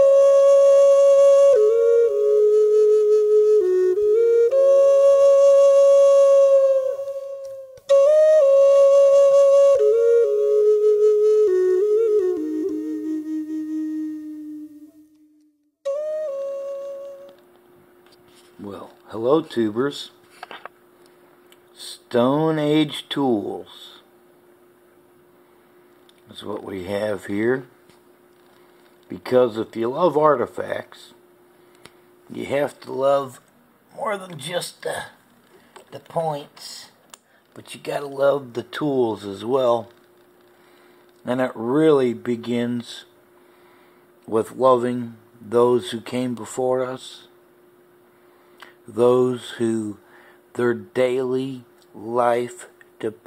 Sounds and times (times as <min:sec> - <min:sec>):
Speech: 0:18.6 - 0:20.2, 0:21.8 - 0:24.1, 0:26.3 - 0:27.7, 0:29.1 - 0:31.2, 0:32.3 - 0:35.2, 0:35.9 - 0:37.0, 0:37.6 - 0:40.0, 0:41.2 - 0:43.1, 0:44.3 - 0:47.4, 0:48.9 - 0:50.0, 0:50.6 - 0:53.2.